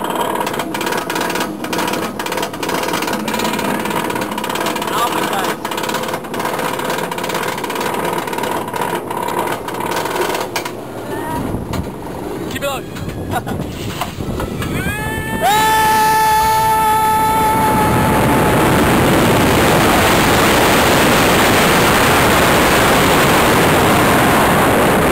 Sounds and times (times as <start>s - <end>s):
Outside, urban or manmade: 0.0s - 25.1s.